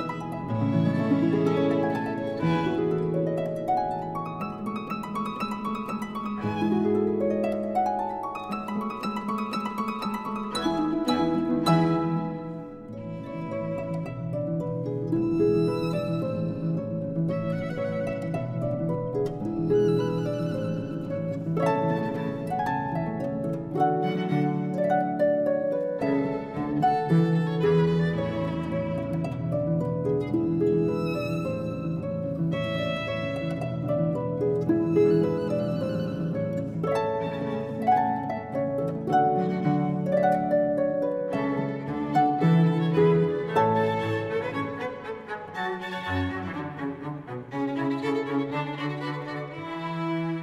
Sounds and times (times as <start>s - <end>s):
Cello: 0.0s - 50.4s
Classical music: 0.0s - 50.4s
Violin, fiddle: 0.0s - 50.4s.